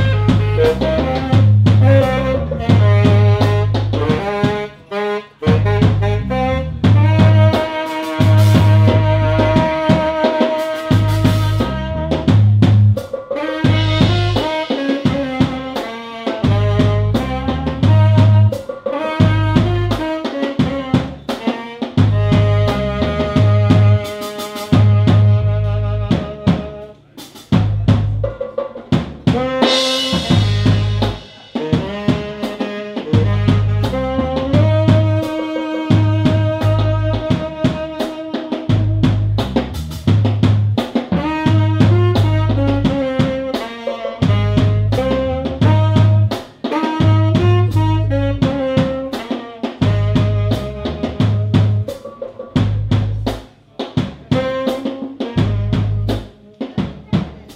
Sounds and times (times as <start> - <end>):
Saxophone: 0.0 - 28.4, 29.2 - 57.5
Inside, small room: 0.0 - 57.5
Jazz: 0.0 - 57.5.